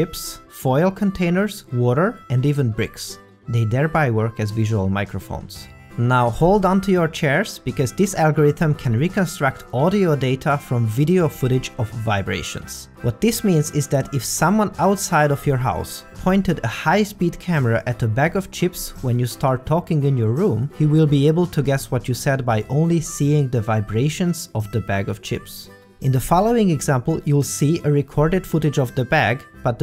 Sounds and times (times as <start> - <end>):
Music: 0.0 - 29.8
Speech: 0.0 - 29.8.